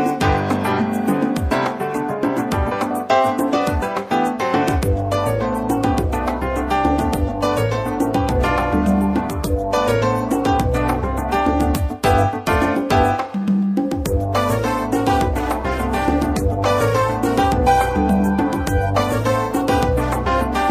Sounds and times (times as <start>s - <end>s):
Music: 0.0s - 20.7s.